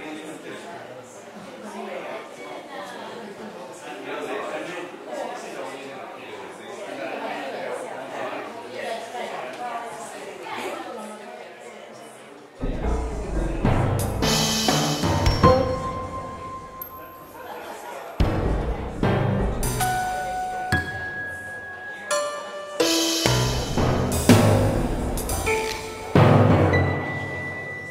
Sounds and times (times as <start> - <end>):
Speech: 0.0 - 14.5, 15.8 - 23.6
Music: 12.6 - 17.4, 18.2 - 27.9.